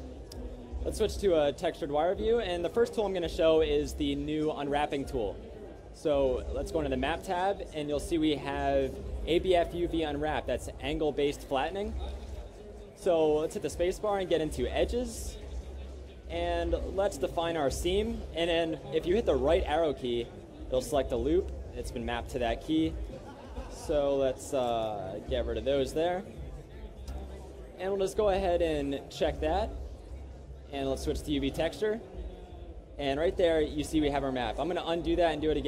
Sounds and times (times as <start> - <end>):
Speech: 0.0 - 35.6.